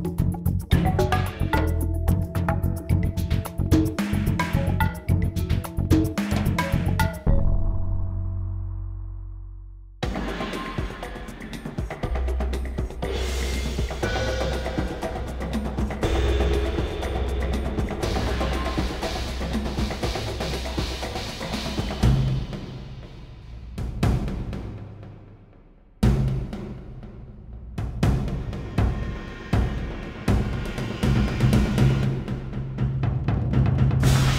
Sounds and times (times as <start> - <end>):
Timpani: 10.0 - 25.0, 27.8 - 34.3.